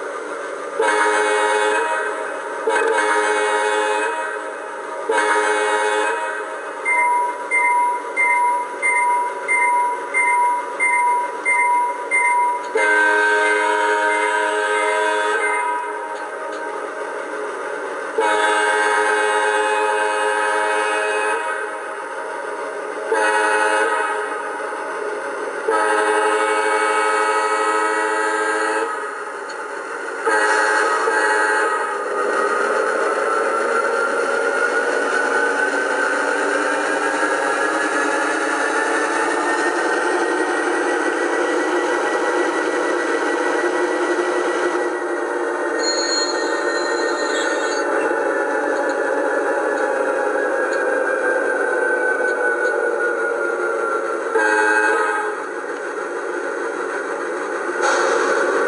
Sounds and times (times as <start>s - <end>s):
Beep, bleep: 6.9s - 12.7s.